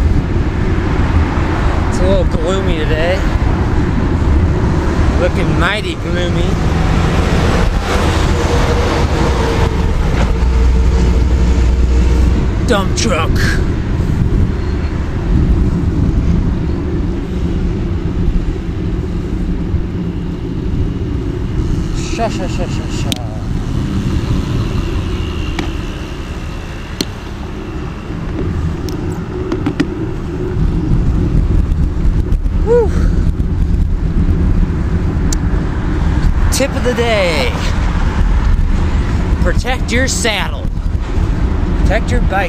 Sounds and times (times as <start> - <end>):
Bicycle: 0.0 - 2.0, 3.1 - 5.2, 13.4 - 36.6, 37.5 - 39.5, 40.6 - 42.4.